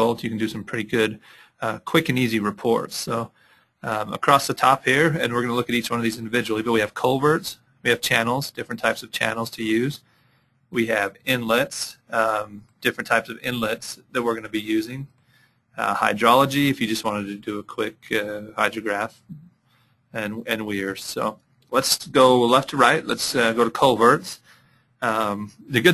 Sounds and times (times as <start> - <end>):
Speech: 0.0 - 10.1, 10.7 - 15.2, 15.8 - 25.9.